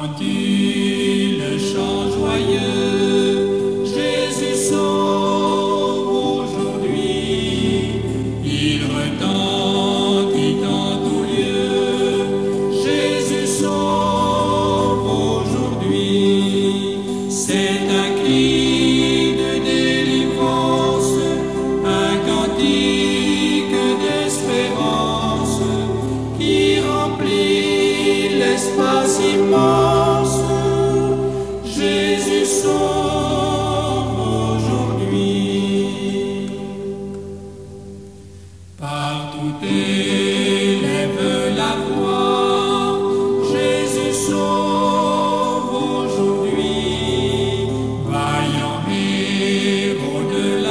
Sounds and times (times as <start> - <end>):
Mantra: 0.0 - 37.3, 38.8 - 50.7.